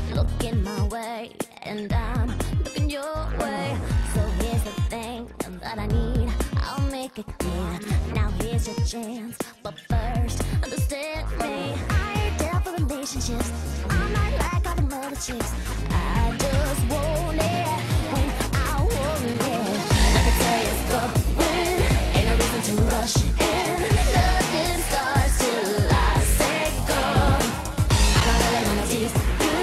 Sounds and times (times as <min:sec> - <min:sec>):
Pop music: 0:00.0 - 0:29.6
Funk: 0:11.4 - 0:29.6.